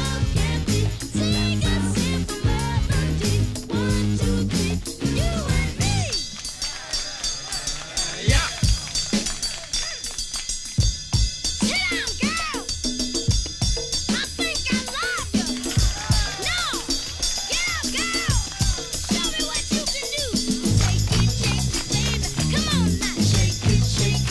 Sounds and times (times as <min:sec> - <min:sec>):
Funk: 0:00.0 - 0:06.7, 0:14.1 - 0:24.3.